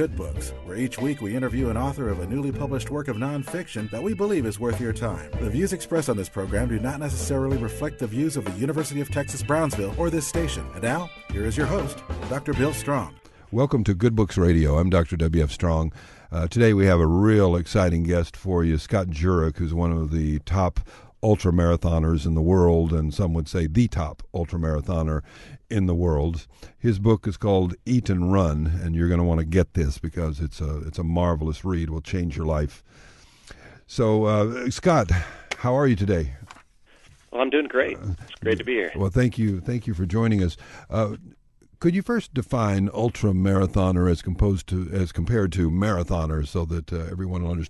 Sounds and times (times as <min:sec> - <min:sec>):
Speech: 0:00.0 - 0:32.8, 0:33.9 - 0:36.5, 0:37.4 - 0:47.7.